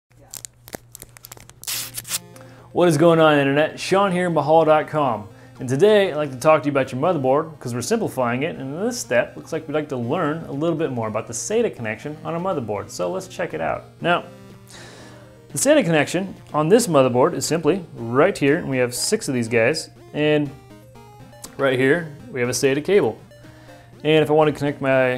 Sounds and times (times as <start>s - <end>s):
Tearing: 0.2s - 2.3s
Speech: 2.8s - 14.3s, 15.6s - 20.5s, 21.6s - 23.2s, 24.0s - 25.1s.